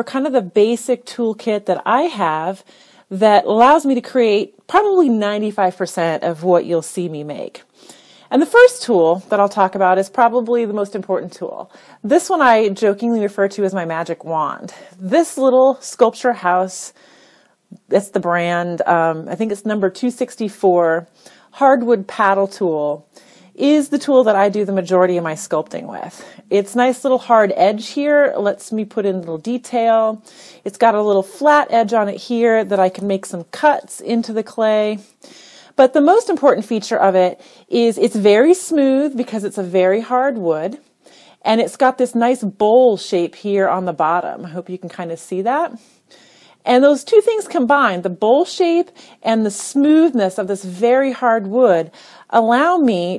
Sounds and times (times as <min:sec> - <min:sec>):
Speech: 0:00.0 - 0:07.6, 0:08.3 - 0:17.0, 0:17.8 - 0:23.0, 0:23.6 - 0:35.1, 0:35.8 - 0:40.8, 0:41.5 - 0:45.8, 0:46.7 - 0:53.1.